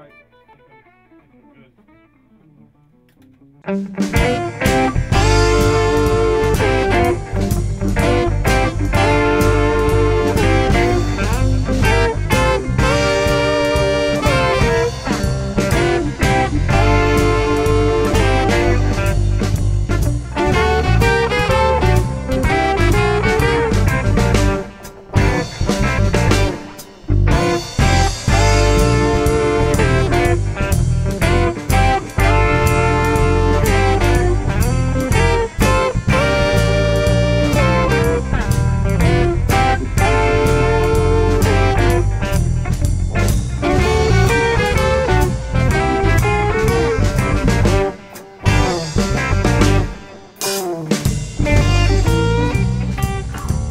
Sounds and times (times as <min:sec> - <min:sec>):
Music: 0:00.0 - 0:53.7.